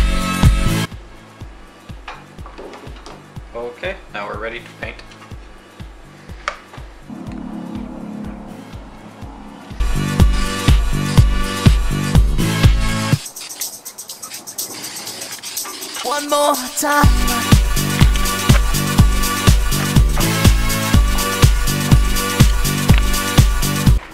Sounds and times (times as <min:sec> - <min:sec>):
Music: 0:00.0 - 0:24.1.